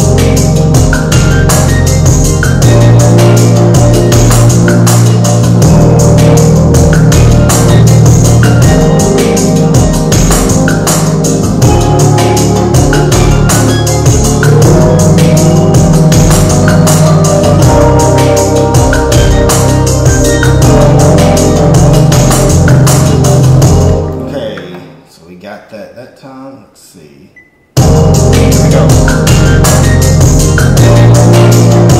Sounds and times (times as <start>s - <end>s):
Percussion: 0.0s - 25.0s, 27.8s - 31.9s.